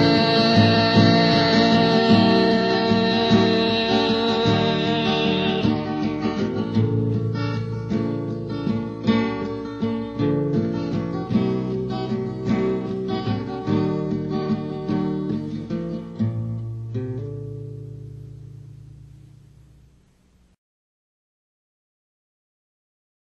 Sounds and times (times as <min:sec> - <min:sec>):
Bass guitar: 0:00.0 - 0:20.5.